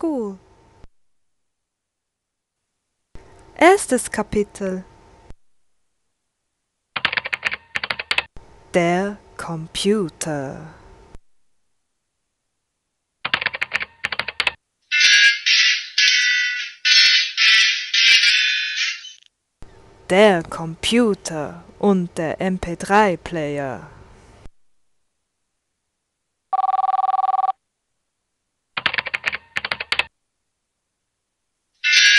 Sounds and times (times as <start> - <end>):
Speech: 0.0 - 0.4, 3.6 - 4.9, 8.7 - 10.8, 20.1 - 24.0.